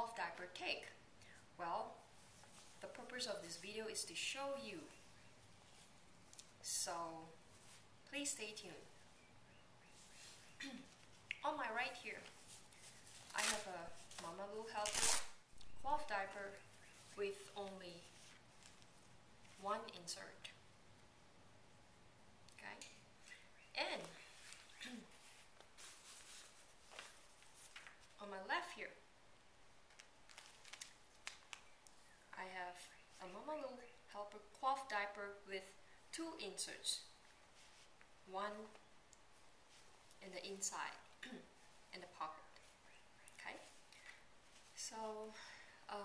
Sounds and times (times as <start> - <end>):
Speech: 0.0 - 1.0, 1.6 - 2.0, 2.8 - 5.0, 6.6 - 7.4, 8.1 - 8.9, 10.6 - 12.3, 13.3 - 15.1, 15.8 - 16.6, 17.2 - 18.1, 19.6 - 20.6, 22.6 - 23.0, 23.8 - 24.2, 24.8 - 25.1, 28.2 - 29.0, 32.4 - 37.1, 38.3 - 38.8, 40.2 - 42.6, 43.4 - 43.7, 44.8 - 46.0
Inside, small room: 0.0 - 46.0.